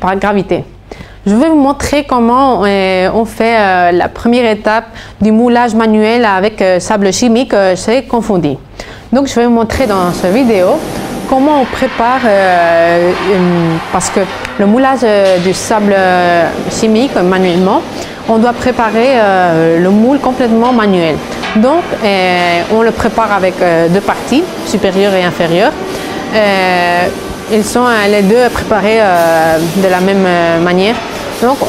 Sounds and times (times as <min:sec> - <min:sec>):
Speech: 0:00.0 - 0:00.7, 0:01.3 - 0:25.8, 0:26.4 - 0:31.6.